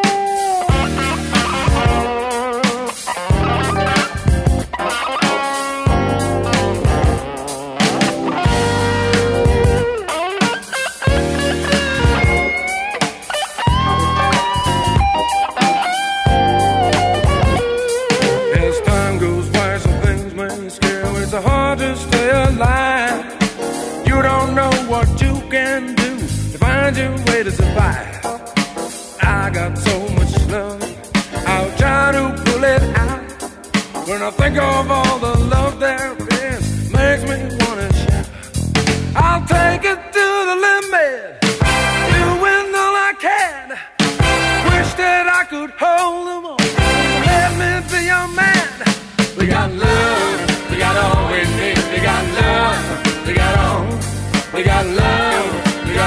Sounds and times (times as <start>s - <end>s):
Music: 0.0s - 56.0s.